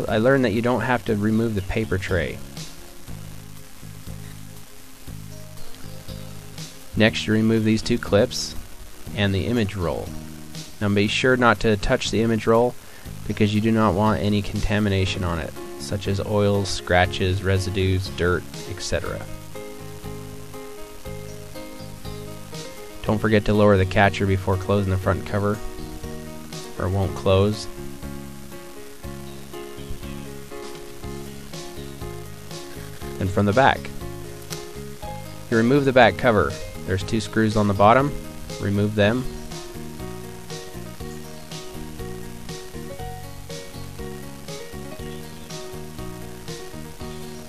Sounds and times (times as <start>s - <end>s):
Speech: 0.0s - 2.5s, 7.0s - 10.1s, 10.8s - 19.3s, 23.0s - 25.6s, 26.8s - 27.8s, 33.2s - 34.0s, 35.5s - 39.3s
Music: 0.0s - 47.4s.